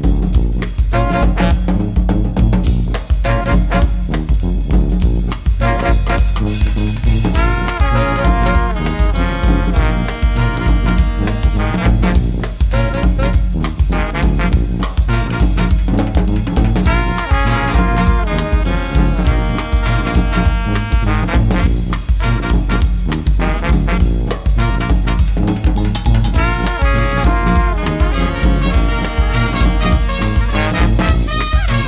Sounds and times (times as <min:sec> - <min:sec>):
Brass instrument: 0:00.0 - 0:31.8
Jazz: 0:00.0 - 0:31.8.